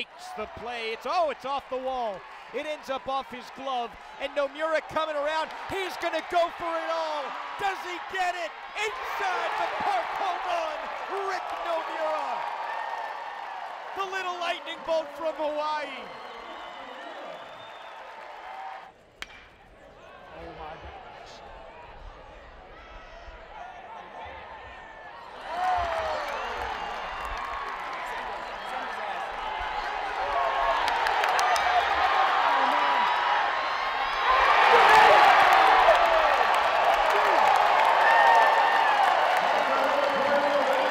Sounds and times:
Speech: 0.0 - 12.4, 14.0 - 16.1, 39.5 - 40.9
Run: 21.8 - 40.9.

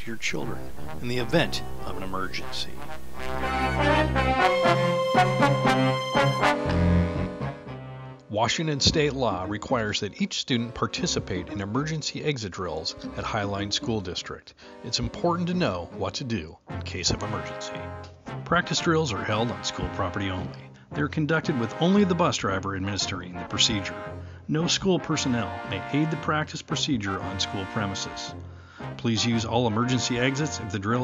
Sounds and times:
Speech: 0.0 - 2.8, 8.3 - 28.4, 29.0 - 31.0
Music: 0.0 - 31.0.

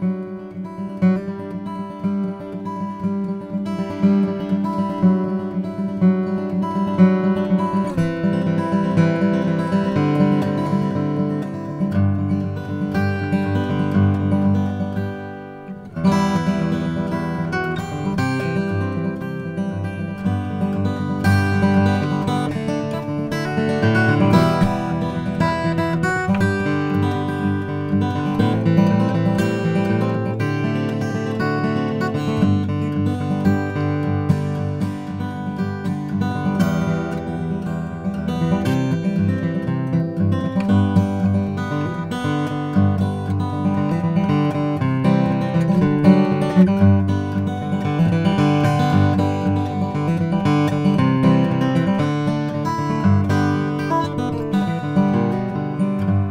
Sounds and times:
Strum: 0.1 - 56.3.

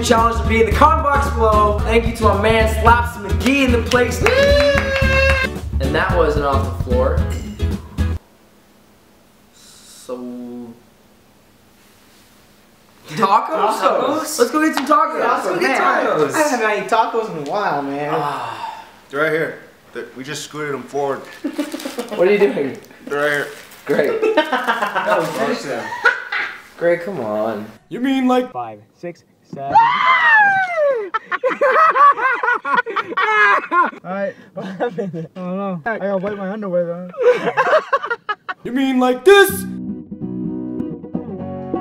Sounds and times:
Laughter: 21.3 - 22.5, 23.9 - 26.7, 30.4 - 34.0, 34.6 - 35.4, 37.1 - 38.7.

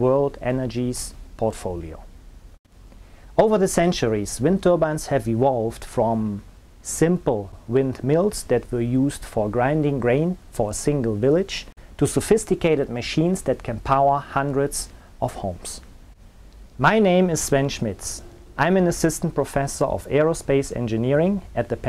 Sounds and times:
Speech: 0.0 - 2.1, 3.4 - 15.9, 16.8 - 21.8.

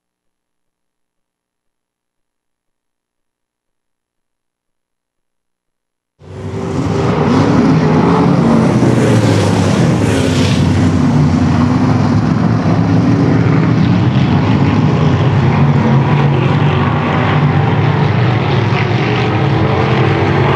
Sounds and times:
Car passing by: 6.2 - 20.5.

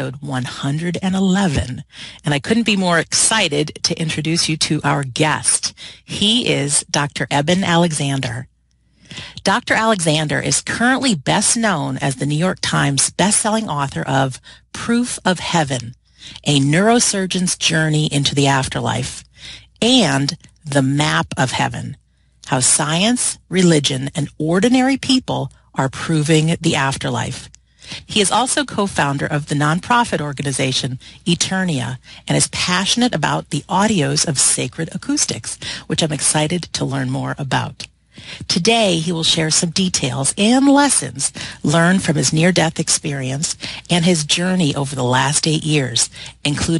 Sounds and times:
Speech: 0.0 - 8.5, 9.1 - 46.7.

